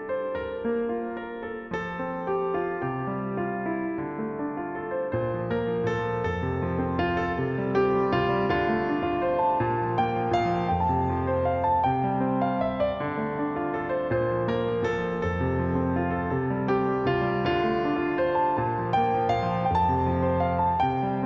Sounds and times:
Music: 0.0 - 21.2.

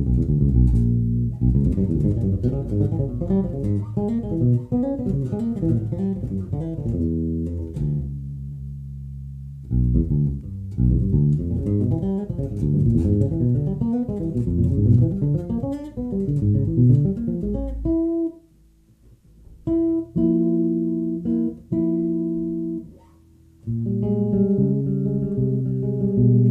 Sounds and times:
Electric guitar: 0.0 - 18.4, 19.4 - 26.5
Bass guitar: 0.0 - 26.5.

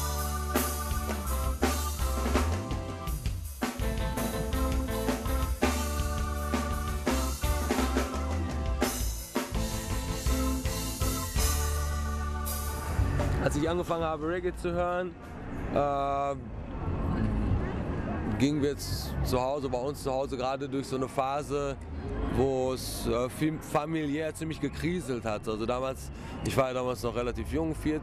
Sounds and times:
Music: 0.0 - 14.1
Speech: 13.4 - 16.5, 17.2 - 21.8, 22.4 - 28.0.

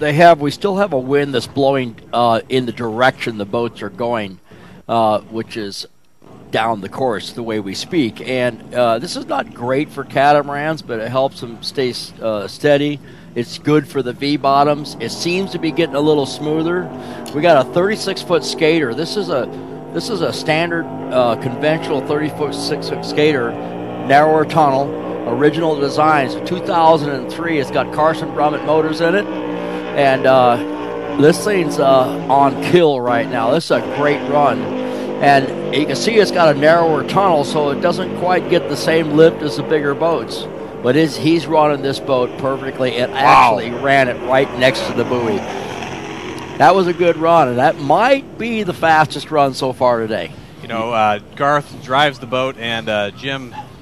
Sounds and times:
Speech: 0.0 - 5.9, 6.5 - 29.3, 30.0 - 30.6, 31.2 - 45.4, 46.6 - 53.6.

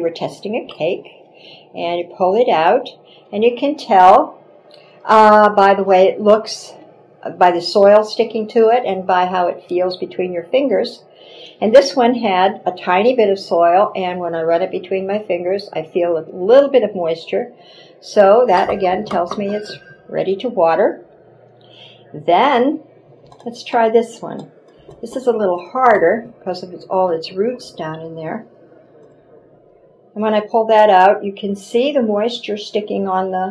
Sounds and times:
Speech: 0.0 - 1.2, 1.8 - 4.4, 5.1 - 11.0, 11.6 - 21.0, 22.1 - 22.8, 23.4 - 28.5, 30.2 - 33.5.

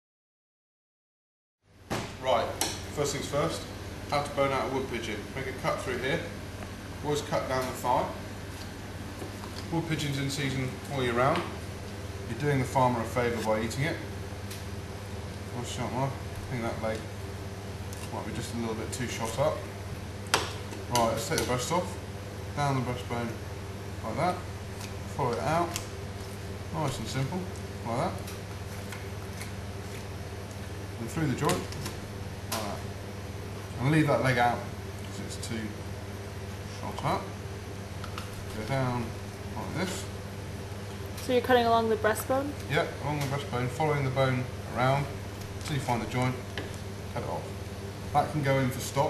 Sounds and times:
Speech: 2.2 - 6.4, 7.0 - 8.2, 9.7 - 11.6, 12.3 - 14.1, 15.5 - 17.1, 18.1 - 19.7, 20.9 - 22.0, 22.6 - 23.4, 24.0 - 24.5, 25.2 - 25.8, 26.7 - 28.3, 31.0 - 31.7, 32.6 - 32.8, 33.8 - 35.8, 36.8 - 37.4, 38.6 - 40.1, 41.2 - 46.4, 47.1 - 47.5, 48.2 - 49.1.

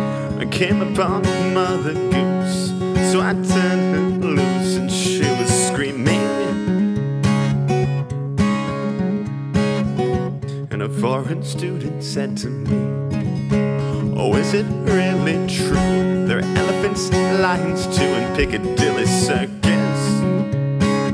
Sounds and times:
Music: 0.0 - 21.1.

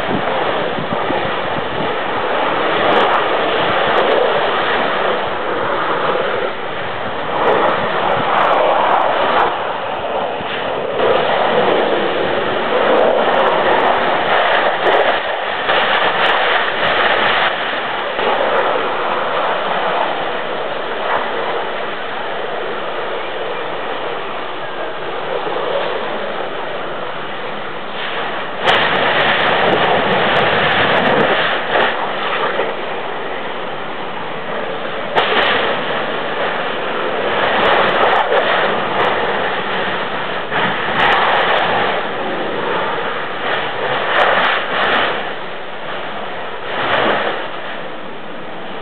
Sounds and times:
Eruption: 0.0 - 48.8.

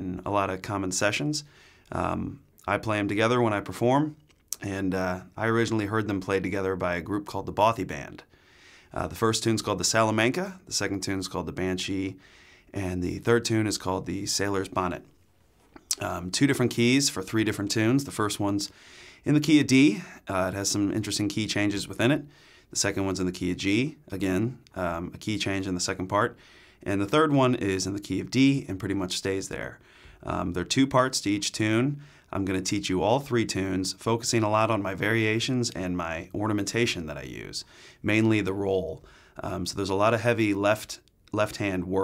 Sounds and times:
Speech: 0.0 - 8.3, 9.0 - 15.1, 15.9 - 42.0.

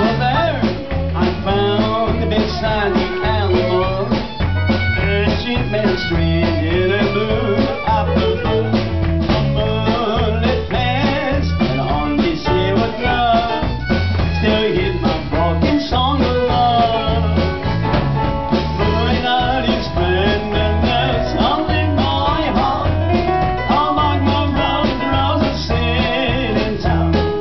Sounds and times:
Country: 0.0 - 27.4.

